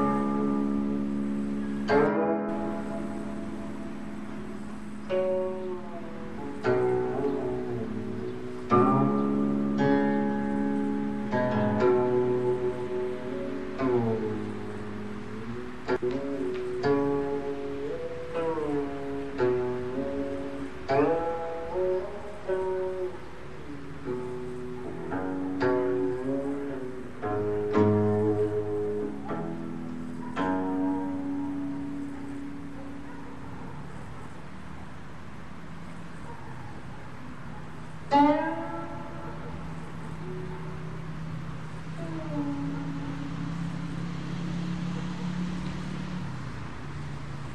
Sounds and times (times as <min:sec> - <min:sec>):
Music: 0:00.0 - 0:47.5.